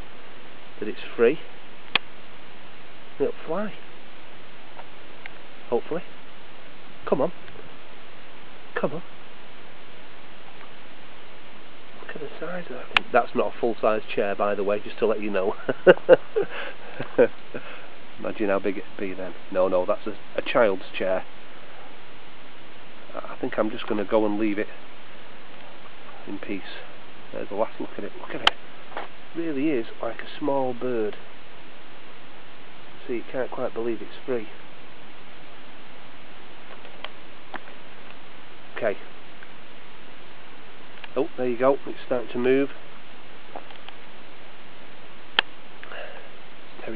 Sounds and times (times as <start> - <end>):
Speech: 0.8 - 1.5, 3.2 - 3.8, 5.7 - 6.1, 7.1 - 7.4, 8.8 - 9.1, 12.0 - 15.6, 18.2 - 21.3, 23.1 - 24.8, 26.2 - 28.5, 29.4 - 31.2, 33.0 - 34.6, 38.8 - 39.1, 41.1 - 42.8.